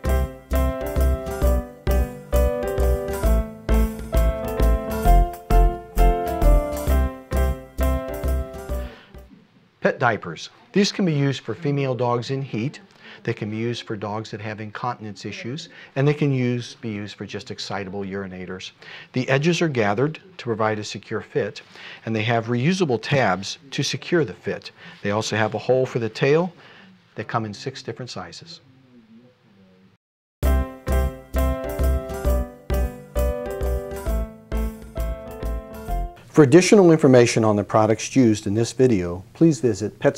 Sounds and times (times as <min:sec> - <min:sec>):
Music: 0:00.0 - 0:09.4, 0:30.4 - 0:36.3
Speech: 0:09.3 - 0:26.6, 0:27.2 - 0:29.8, 0:36.3 - 0:40.1.